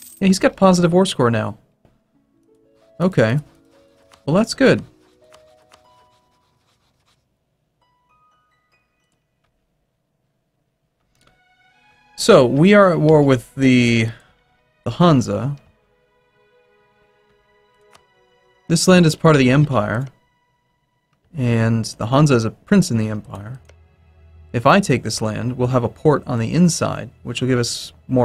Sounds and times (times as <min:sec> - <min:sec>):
Speech: 0:00.2 - 0:01.6, 0:03.0 - 0:03.5, 0:04.3 - 0:04.9, 0:12.2 - 0:14.2, 0:14.9 - 0:15.7, 0:18.7 - 0:20.2, 0:21.4 - 0:23.6, 0:24.6 - 0:28.2
Music: 0:00.3 - 0:09.9, 0:11.0 - 0:28.2.